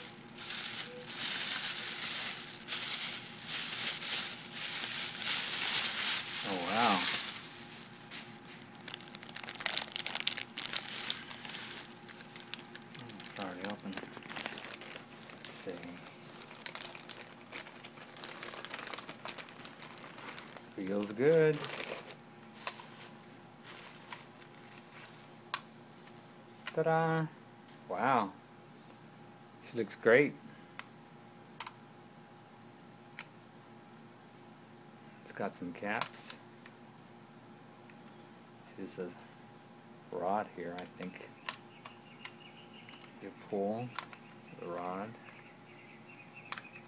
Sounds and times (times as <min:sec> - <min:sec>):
Speech: 0:06.4 - 0:07.1, 0:13.0 - 0:14.1, 0:15.5 - 0:16.0, 0:20.8 - 0:21.7, 0:26.7 - 0:28.4, 0:29.6 - 0:30.4, 0:35.3 - 0:36.4, 0:38.6 - 0:39.2, 0:40.1 - 0:41.3, 0:43.2 - 0:44.0, 0:44.6 - 0:45.2.